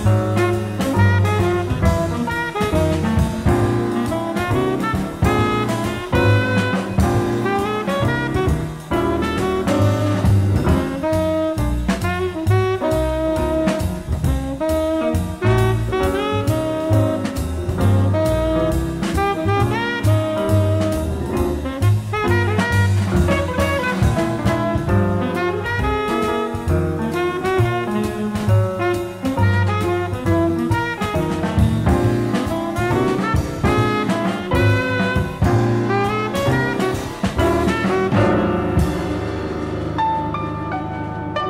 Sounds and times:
Saxophone: 0.0 - 39.6.

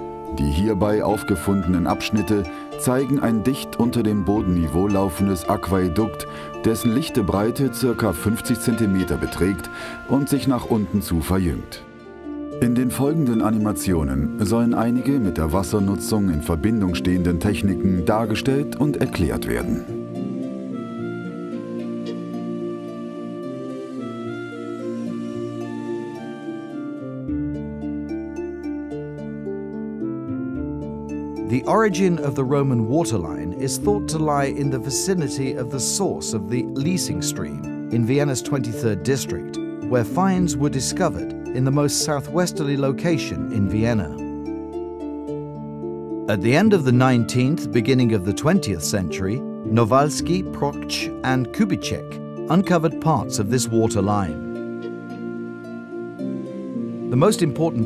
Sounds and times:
Music: 0.0 - 57.8
Speech: 0.3 - 11.8, 12.6 - 19.9, 31.5 - 44.2, 46.3 - 54.4, 57.1 - 57.8.

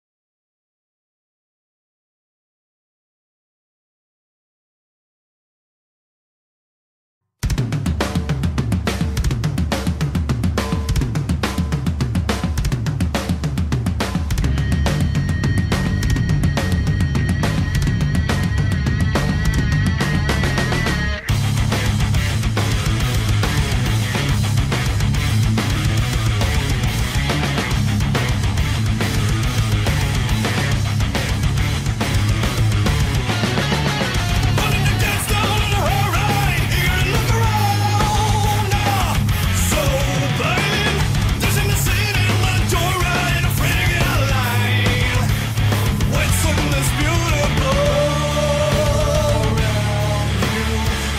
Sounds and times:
Heavy metal: 7.4 - 51.1.

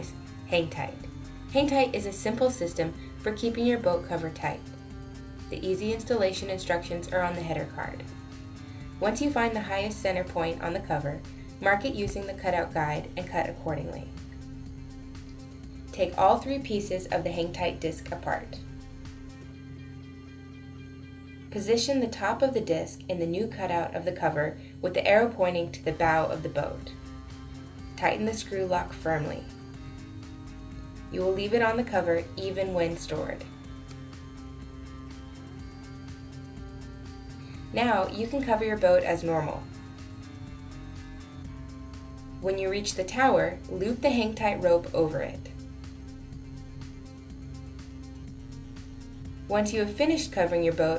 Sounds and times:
Speech: 0.0 - 4.6, 5.5 - 8.1, 9.0 - 14.2, 16.0 - 18.6, 21.6 - 27.0, 28.0 - 29.5, 31.1 - 33.5, 37.7 - 39.7, 42.4 - 45.5, 49.5 - 50.9
Music: 0.0 - 50.9.

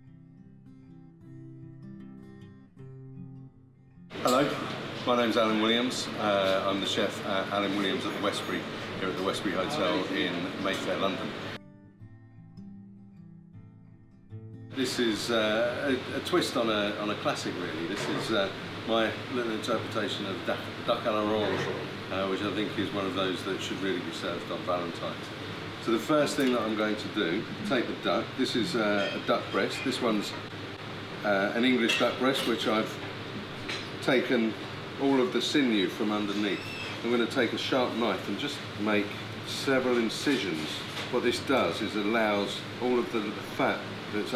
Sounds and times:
Speech: 4.2 - 11.4, 14.8 - 30.4, 31.2 - 33.0, 34.0 - 44.3.

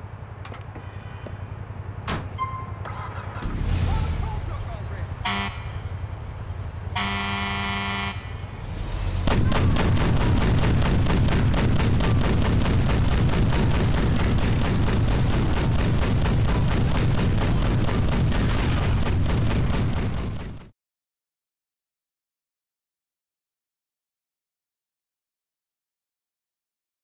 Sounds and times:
Speech: 3.8 - 5.1.

